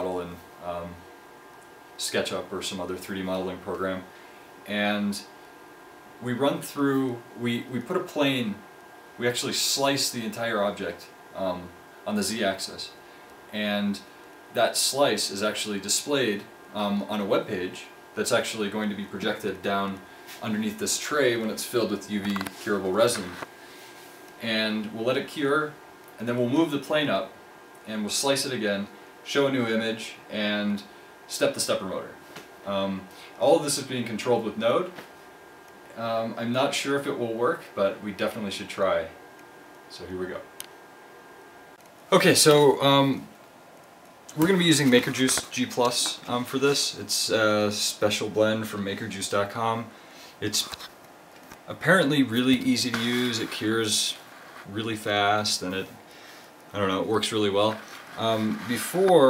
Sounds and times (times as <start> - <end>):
Speech: 0.0 - 1.0, 2.0 - 5.4, 6.2 - 23.5, 24.4 - 35.1, 35.9 - 39.2, 39.9 - 40.5, 42.1 - 43.3, 44.3 - 50.9, 51.7 - 56.0, 56.7 - 59.3.